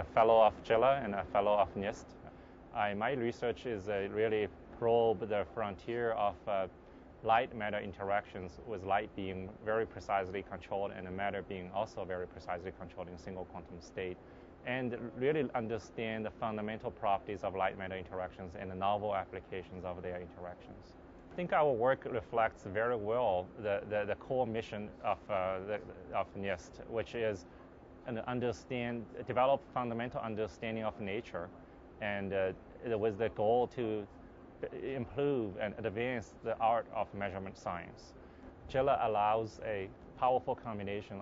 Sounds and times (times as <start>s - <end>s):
Speech: 0.0s - 27.4s, 28.0s - 41.2s.